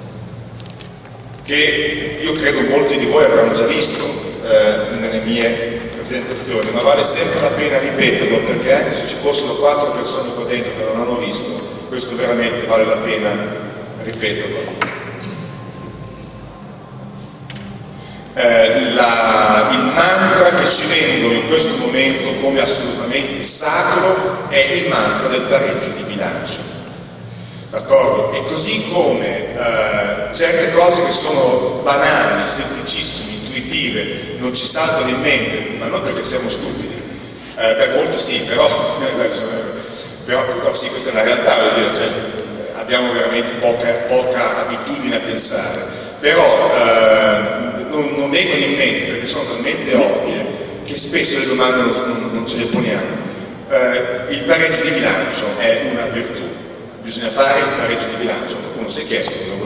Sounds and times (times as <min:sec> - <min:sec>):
Speech: 0:01.4 - 0:16.1, 0:18.4 - 0:26.8, 0:27.7 - 0:59.6.